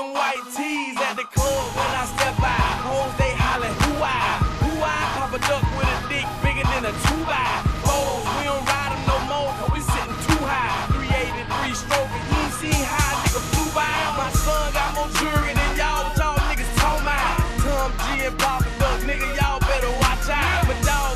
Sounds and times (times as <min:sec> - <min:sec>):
Music: 0:00.0 - 0:21.1.